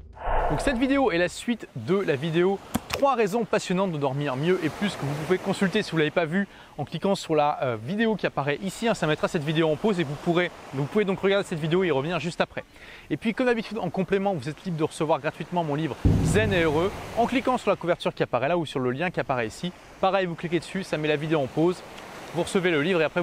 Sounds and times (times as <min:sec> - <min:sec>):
Speech: 0:00.6 - 0:23.2.